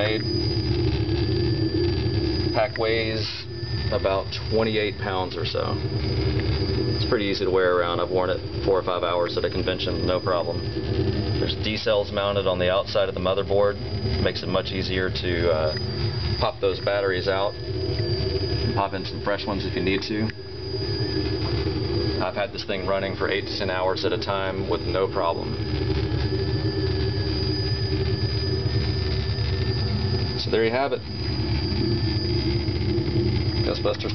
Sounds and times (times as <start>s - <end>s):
Speech: 0.0s - 0.2s, 2.6s - 5.8s, 7.0s - 10.6s, 11.4s - 15.8s, 16.4s - 17.6s, 18.8s - 20.3s, 22.2s - 25.5s, 30.4s - 31.0s, 33.6s - 34.1s.